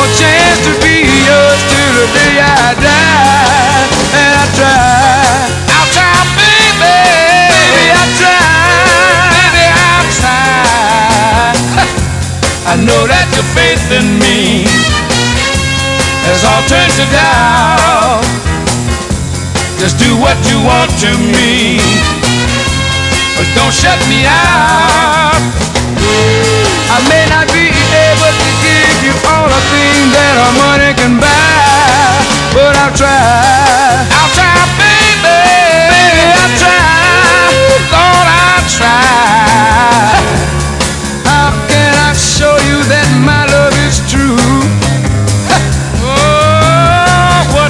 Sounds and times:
Soul music: 0.0s - 47.6s.

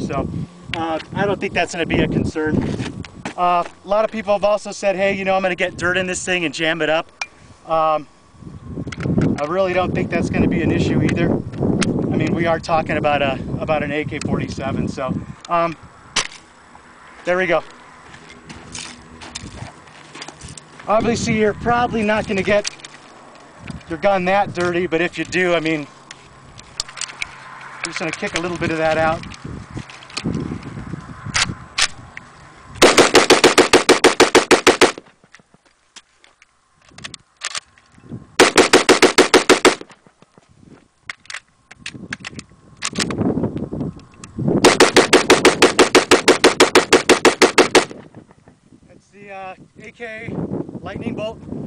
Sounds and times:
Speech: 0.0s - 2.6s, 3.4s - 7.1s, 9.4s - 11.3s, 12.1s - 15.8s, 17.2s - 17.7s, 20.9s - 22.7s, 23.9s - 25.9s, 27.9s - 29.2s, 48.9s - 51.4s
Machine gun: 32.8s - 35.0s, 38.4s - 39.8s, 44.7s - 47.9s.

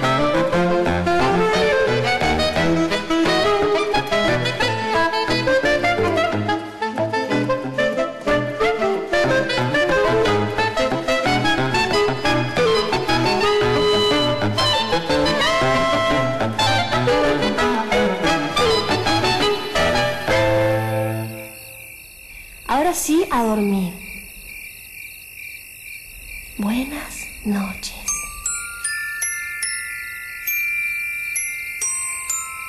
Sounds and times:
Music: 0.0s - 21.6s, 28.1s - 32.6s
Speech: 22.7s - 24.1s, 26.6s - 28.2s.

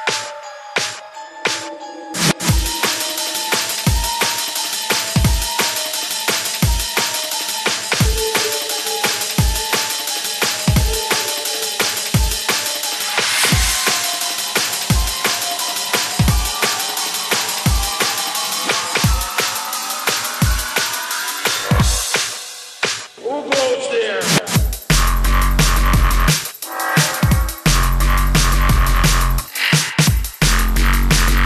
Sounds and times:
Music: 0.0s - 31.4s.

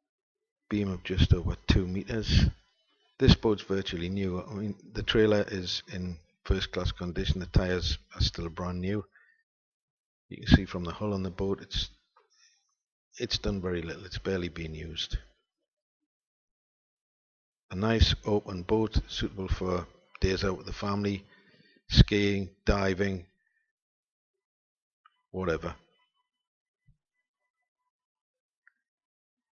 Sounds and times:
Speech: 0.7s - 2.6s, 3.2s - 9.1s, 10.3s - 11.9s, 13.2s - 15.2s, 17.7s - 21.3s, 21.9s - 23.3s, 25.4s - 25.8s.

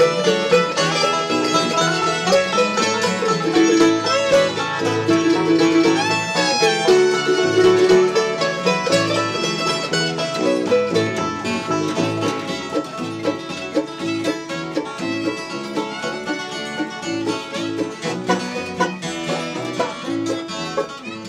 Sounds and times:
Banjo: 0.0s - 21.2s.

